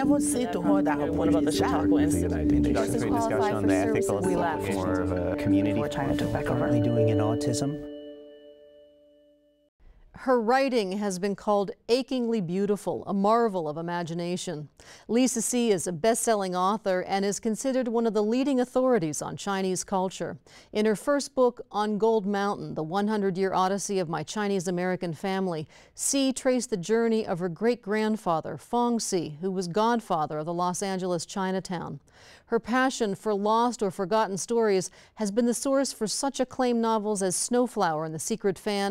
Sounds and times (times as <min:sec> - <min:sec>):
Female speech, woman speaking: 0:00.0 - 0:05.0, 0:10.2 - 0:38.9
Conversation: 0:00.0 - 0:07.5, 0:10.3 - 0:38.9
Music: 0:00.0 - 0:08.8.